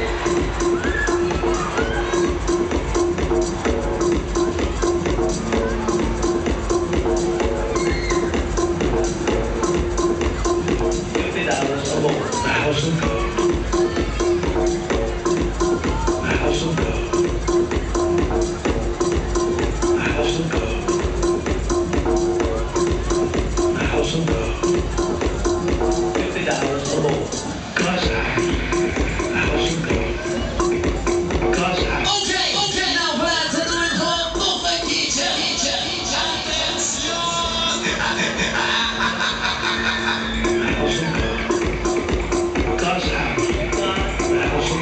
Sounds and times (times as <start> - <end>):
Crowd: 0.0 - 44.8
Music: 0.0 - 44.8.